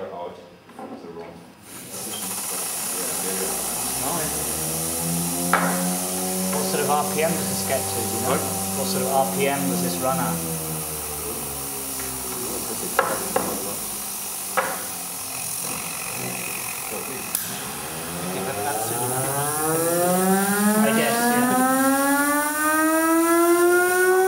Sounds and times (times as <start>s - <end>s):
Speech: 0.0s - 2.3s, 6.6s - 10.4s, 20.8s - 21.6s.